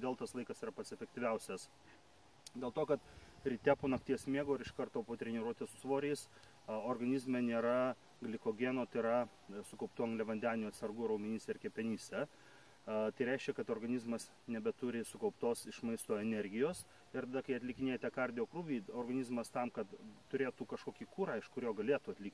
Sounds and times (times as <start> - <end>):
Speech: 0.0 - 1.7, 2.5 - 12.3, 12.9 - 22.3.